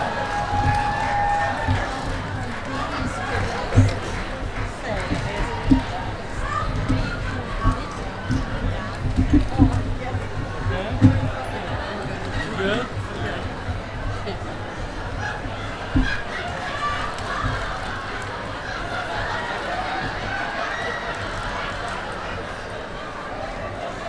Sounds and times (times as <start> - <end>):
Speech: 1.4 - 24.0.